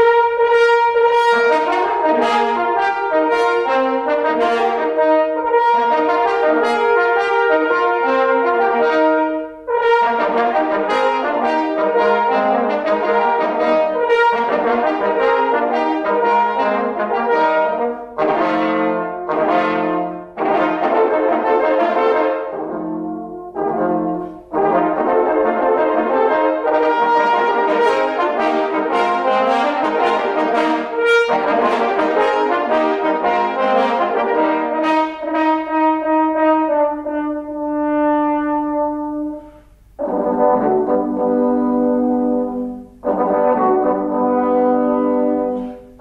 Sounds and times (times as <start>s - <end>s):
French horn: 0.0s - 46.0s
Trombone: 0.0s - 46.0s.